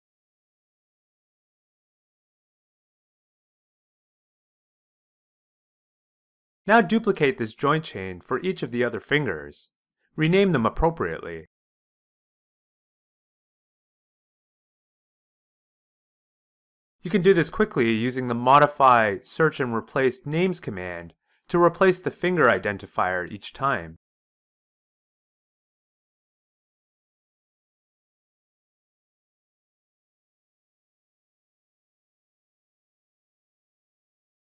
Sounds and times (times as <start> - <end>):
Speech: 6.7 - 11.5, 17.1 - 24.0.